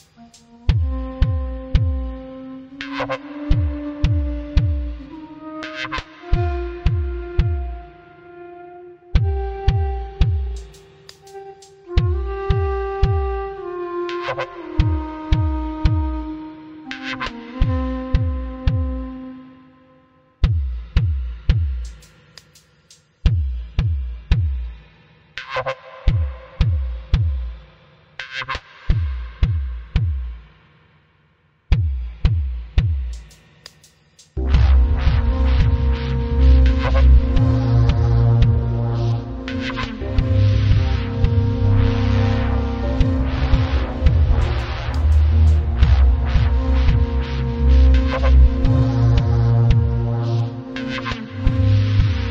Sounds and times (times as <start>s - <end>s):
Music: 0.0s - 52.3s.